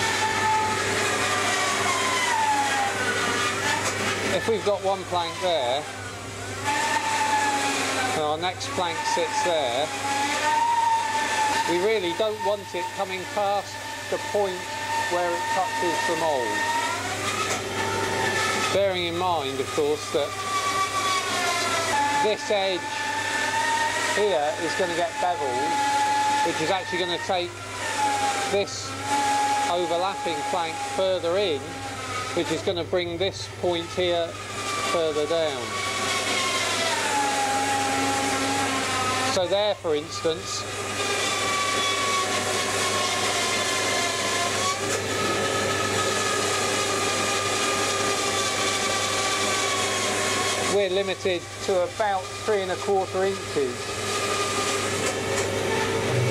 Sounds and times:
Speech: 4.3 - 5.9, 8.2 - 10.0, 11.7 - 16.6, 18.7 - 20.3, 22.2 - 23.0, 24.1 - 25.8, 26.4 - 27.5, 28.5 - 29.0, 29.7 - 31.8, 32.4 - 35.7, 39.3 - 40.7, 50.7 - 53.8
Wood: 6.6 - 32.6, 34.3 - 39.5.

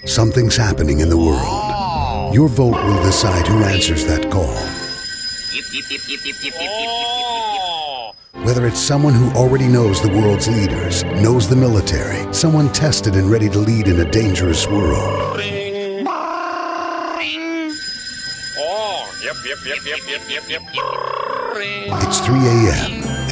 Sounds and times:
Music: 0.0 - 5.0, 8.4 - 15.8, 17.7 - 23.3
Speech: 0.1 - 4.8, 8.4 - 15.9, 21.9 - 23.0.

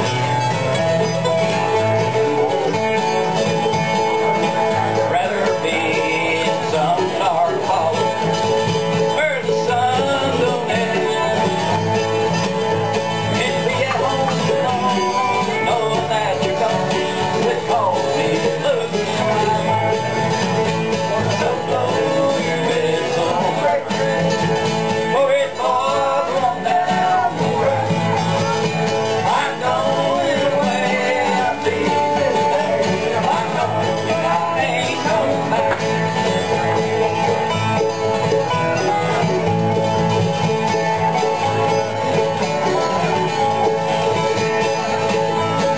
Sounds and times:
Traditional music: 0.0 - 45.7.

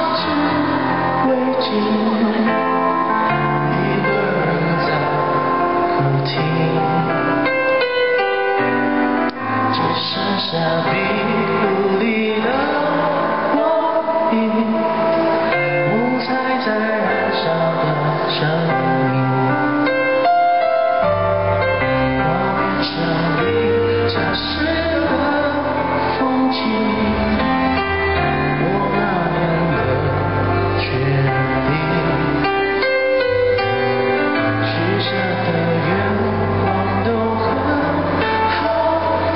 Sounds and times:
Male singing: 0.0 - 7.9, 9.7 - 20.3, 21.8 - 39.3
Music: 0.0 - 39.3.

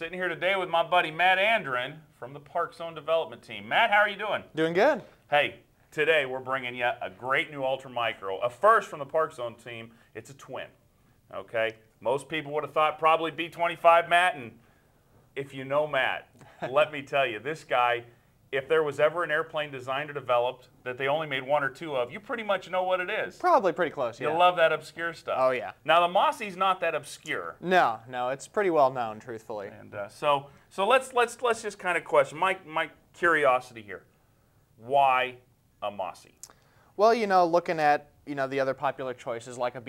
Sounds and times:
Speech: 0.0 - 14.6, 15.4 - 34.1, 34.8 - 36.4, 37.0 - 39.8.

